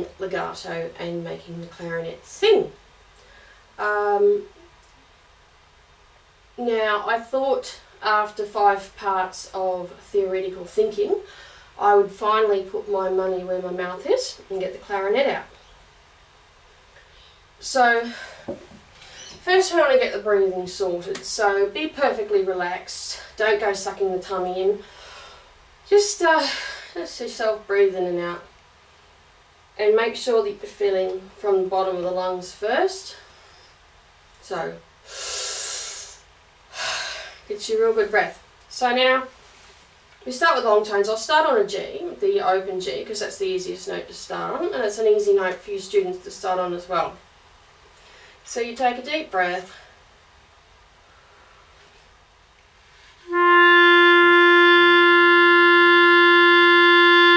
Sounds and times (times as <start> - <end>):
Speech: 0.0 - 2.8, 3.8 - 4.6, 6.6 - 15.6, 17.6 - 18.4, 19.4 - 24.9, 25.9 - 28.5, 29.8 - 33.3, 34.4 - 34.8, 37.5 - 39.4, 40.2 - 47.2, 48.5 - 49.9.